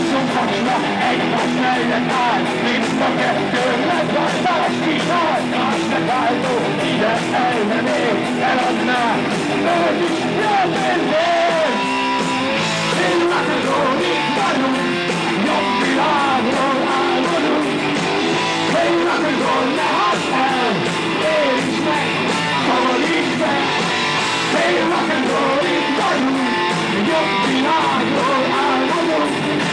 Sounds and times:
Heavy metal: 0.0 - 29.7.

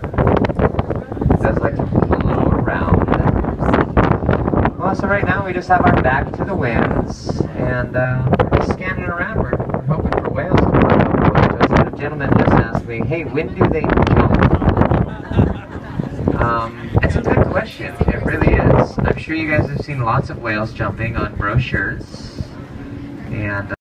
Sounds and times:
Vehicle: 0.0 - 23.8
Speech: 1.4 - 3.9, 4.8 - 10.8, 11.4 - 14.6, 16.4 - 22.6, 23.3 - 23.8.

